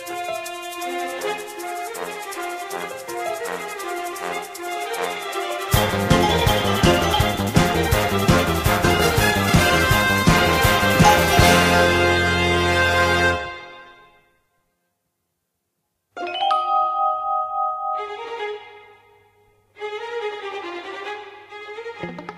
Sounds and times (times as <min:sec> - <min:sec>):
Glockenspiel: 0:05.8 - 0:08.6, 0:10.9 - 0:12.0, 0:16.2 - 0:19.0
Soundtrack music: 0:05.8 - 0:13.6.